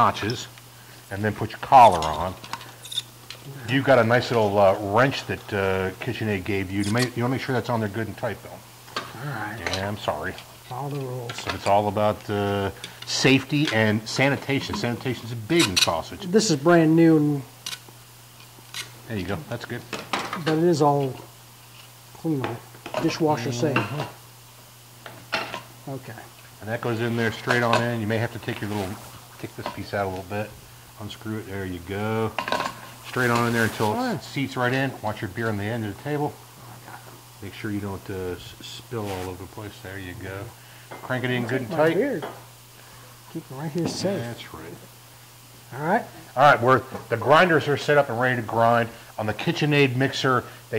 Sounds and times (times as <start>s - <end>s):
Inside, small room: 0.0s - 50.7s
Speech: 1.1s - 2.4s, 9.2s - 17.5s, 25.9s - 32.4s, 33.1s - 36.4s, 37.4s - 40.5s, 43.3s - 44.8s, 45.7s - 50.7s.